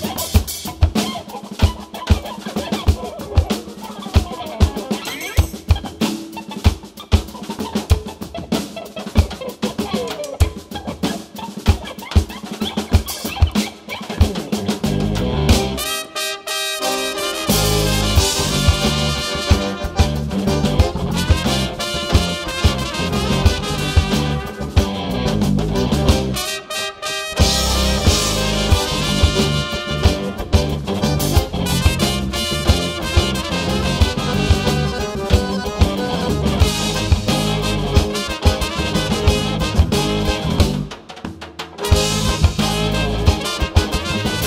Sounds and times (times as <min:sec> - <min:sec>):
Music: 0:00.0 - 0:44.4.